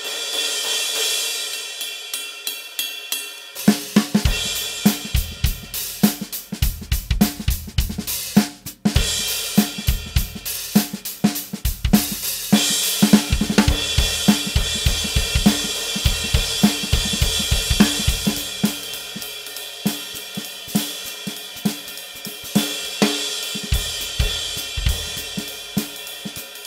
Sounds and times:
Drum kit: 0.0s - 26.6s
Drum: 3.6s - 26.6s.

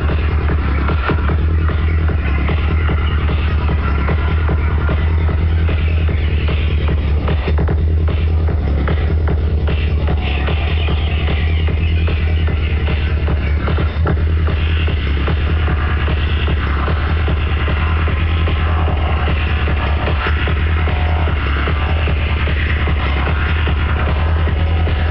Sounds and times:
Music: 0.0s - 25.1s.

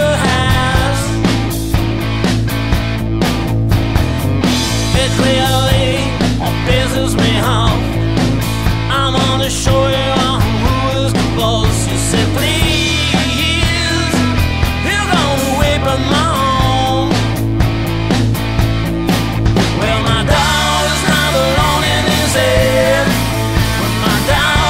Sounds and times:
Music: 0.0s - 24.6s.

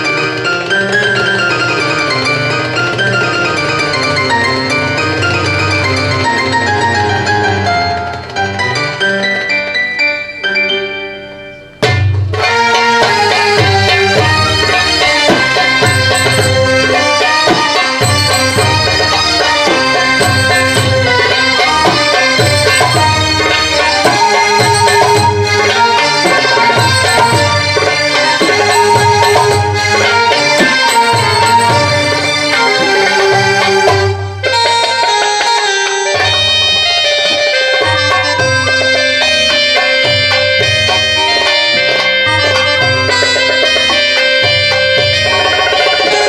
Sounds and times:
Music: 0.0s - 46.2s.

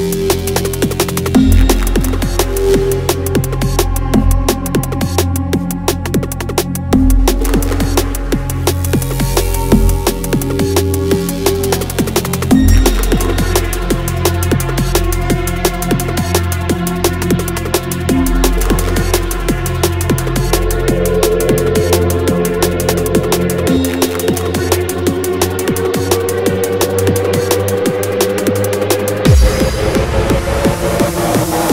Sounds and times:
Music: 0.0s - 31.7s.

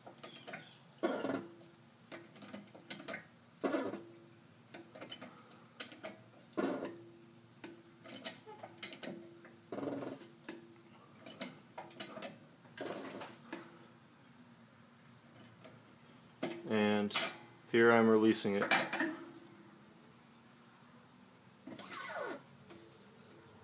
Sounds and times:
Speech: 16.7s - 18.7s.

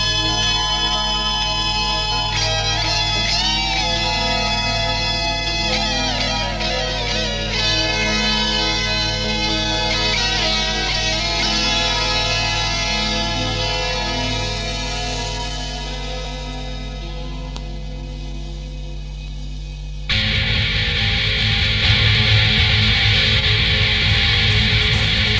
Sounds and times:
Music: 0.0s - 25.3s.

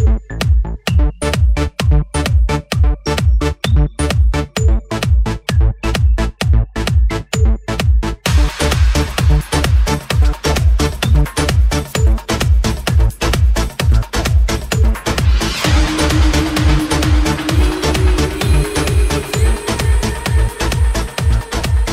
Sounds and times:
Music: 0.0s - 21.9s.

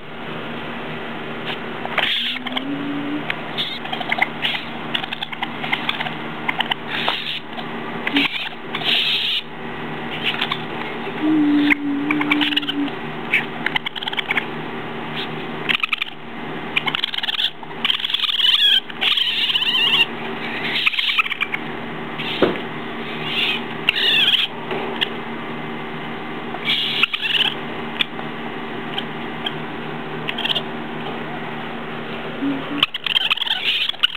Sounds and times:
Animal: 1.4s - 9.5s, 10.1s - 14.5s, 15.2s - 25.2s, 26.6s - 28.1s, 30.2s - 31.5s, 32.4s - 34.1s.

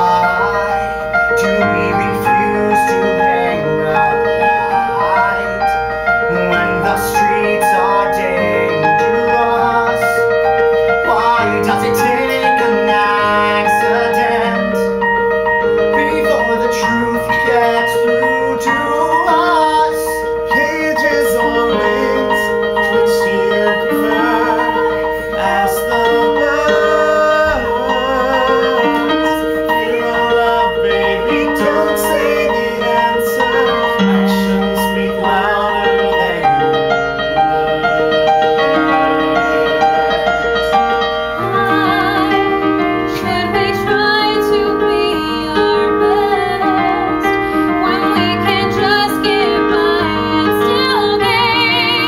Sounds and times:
Music: 0.0s - 52.0s.

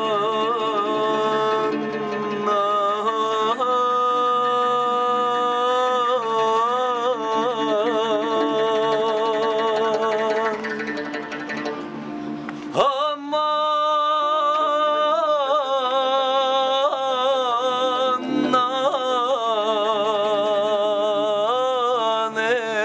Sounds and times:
Music: 0.0s - 22.8s.

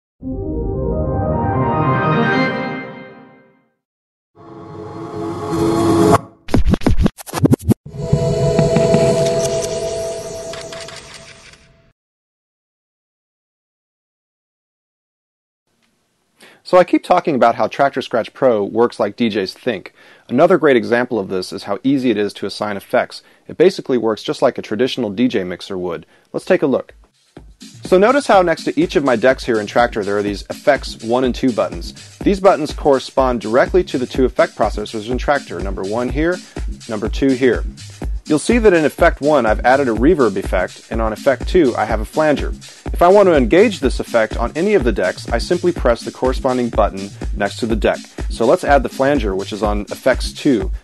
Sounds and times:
Music: 0.2s - 3.8s, 8.0s - 10.9s, 27.0s - 50.8s.

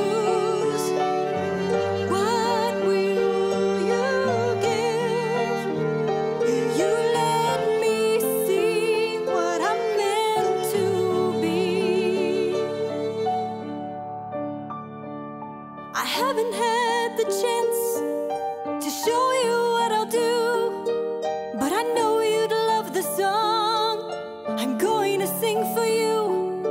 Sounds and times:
Pizzicato: 0.0s - 14.3s
Harp: 0.0s - 14.7s, 16.0s - 26.7s.

